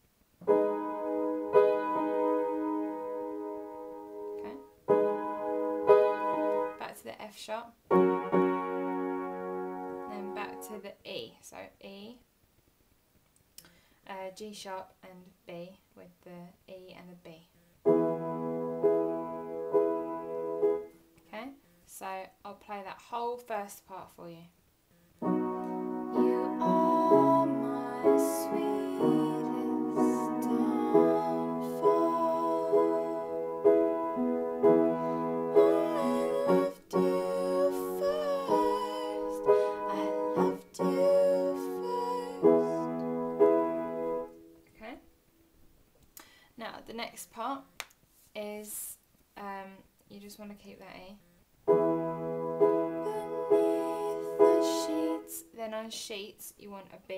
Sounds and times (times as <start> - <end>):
Electric piano: 0.4 - 6.8, 7.9 - 10.8, 17.9 - 21.0, 25.2 - 44.6, 51.7 - 55.4
Independent music: 0.4 - 6.9, 7.9 - 10.8, 17.9 - 21.0, 25.2 - 44.7, 51.7 - 55.4
Speech: 4.4 - 4.6, 6.8 - 7.8, 10.1 - 12.2, 14.1 - 17.6, 21.3 - 24.6, 44.8 - 45.0, 46.6 - 47.7, 48.4 - 51.2, 54.0 - 57.1.